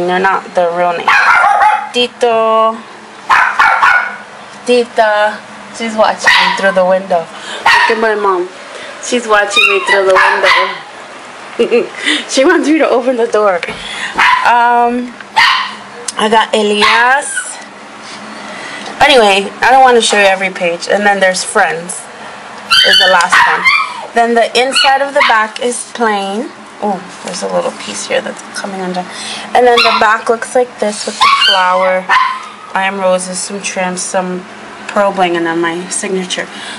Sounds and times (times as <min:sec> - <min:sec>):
Speech: 0:00.0 - 0:01.1, 0:01.9 - 0:02.8, 0:04.6 - 0:10.9, 0:11.7 - 0:13.8, 0:14.5 - 0:15.2, 0:16.1 - 0:17.7, 0:19.0 - 0:22.1, 0:22.9 - 0:32.1, 0:32.8 - 0:36.6
Inside, small room: 0:00.0 - 0:36.7
Domestic animals, pets: 0:01.1 - 0:02.0, 0:09.6 - 0:10.8, 0:22.7 - 0:24.1, 0:29.8 - 0:30.2, 0:31.1 - 0:32.7.